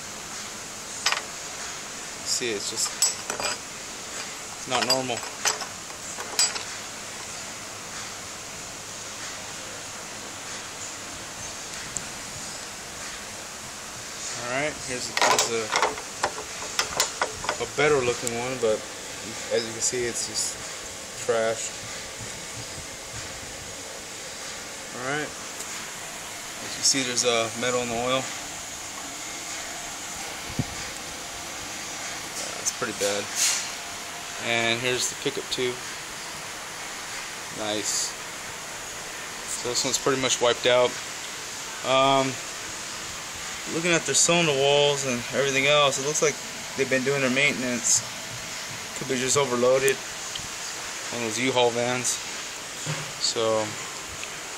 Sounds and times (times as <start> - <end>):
Speech: 2.3 - 3.0, 4.6 - 5.3, 14.4 - 15.8, 17.6 - 20.6, 21.2 - 21.8, 24.9 - 25.4, 26.6 - 28.3, 32.6 - 33.4, 34.4 - 35.8, 37.6 - 38.2, 39.5 - 41.0, 41.8 - 42.4, 43.7 - 48.1, 49.0 - 50.0, 51.1 - 52.2, 53.2 - 53.8.